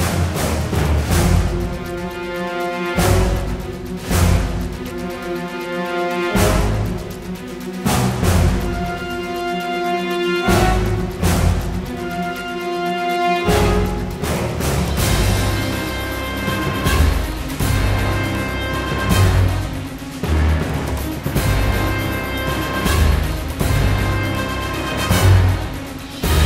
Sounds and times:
Music: 0.0s - 26.4s.

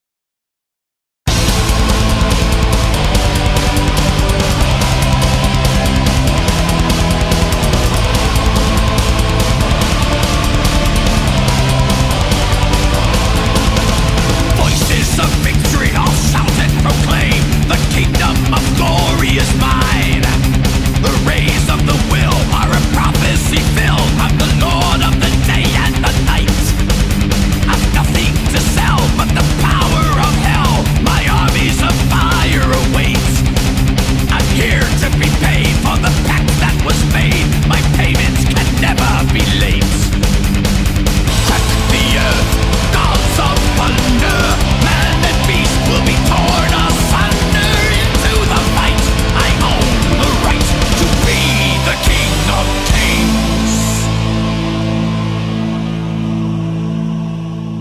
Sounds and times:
Music: 1.3s - 57.8s.

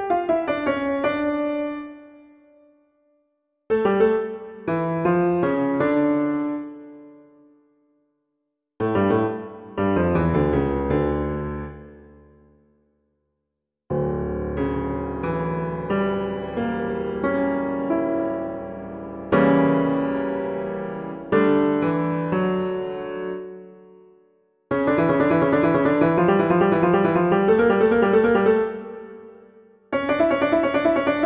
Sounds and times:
Music: 0.0s - 31.2s.

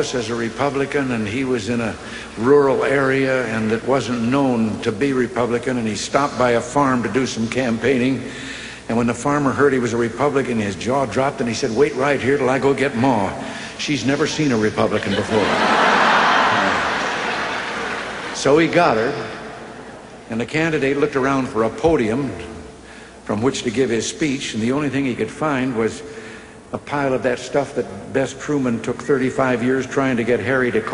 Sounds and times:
Male speech, man speaking: 0.0s - 8.3s, 8.9s - 15.6s, 18.4s - 19.3s, 20.3s - 22.6s, 23.3s - 26.1s, 26.7s - 30.9s
Narration, monologue: 0.0s - 17.4s, 18.1s - 30.9s.

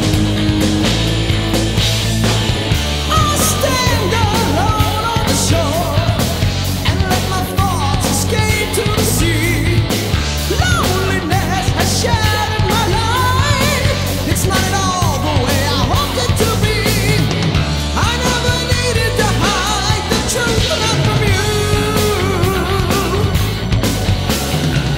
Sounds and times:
Music: 0.0s - 24.9s.

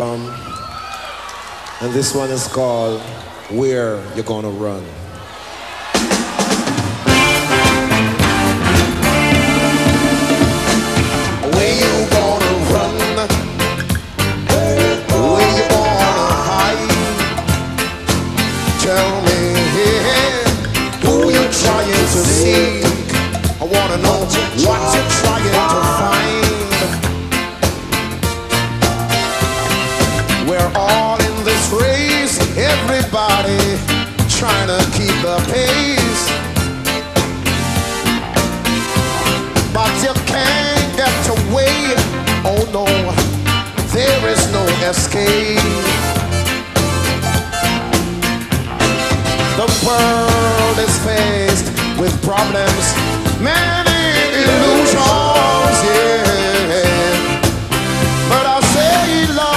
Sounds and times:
Music: 5.3s - 59.5s.

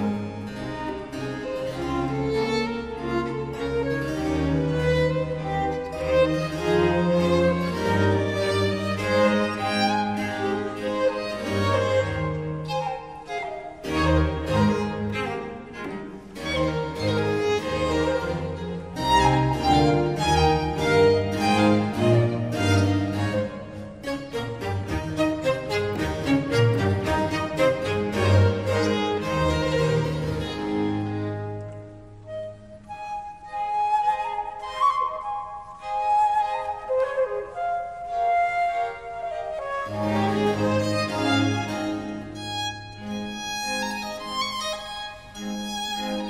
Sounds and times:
Violin, fiddle: 0.0s - 34.8s, 38.4s - 46.2s
Cello: 0.0s - 46.2s
Flute: 3.6s - 43.0s.

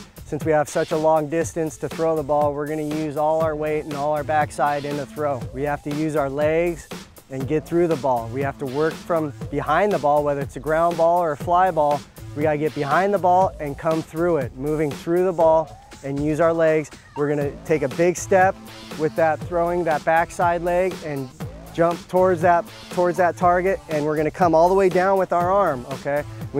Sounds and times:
Music: 0.0s - 26.5s
Speech: 0.3s - 26.5s.

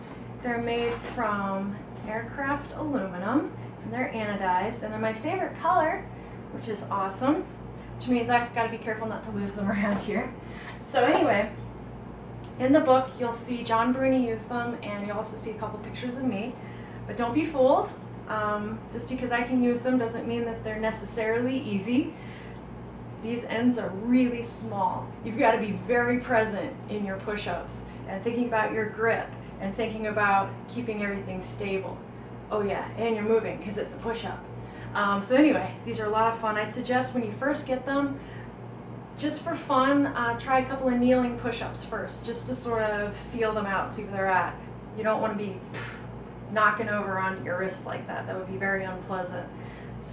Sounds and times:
Speech: 0.4s - 11.6s, 12.6s - 22.2s, 23.2s - 38.2s, 39.2s - 50.1s.

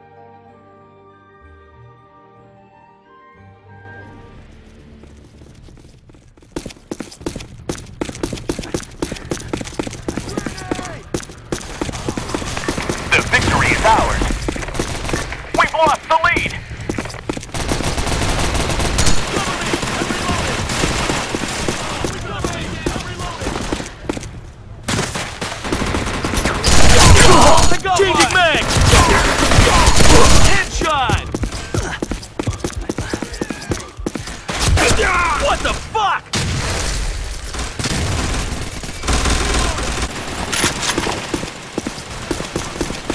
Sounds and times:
Speech: 13.1s - 14.3s, 15.6s - 16.6s, 19.2s - 20.6s, 21.8s - 23.6s, 27.0s - 31.3s, 34.8s - 36.3s.

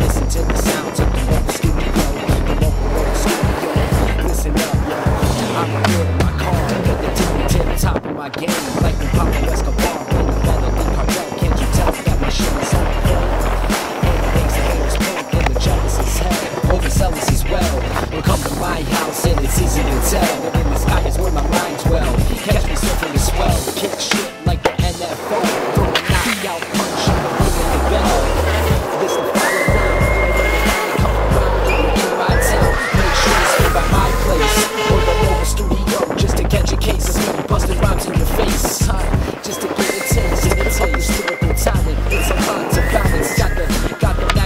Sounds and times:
Music: 0.0s - 44.4s
Skateboard: 0.0s - 44.4s.

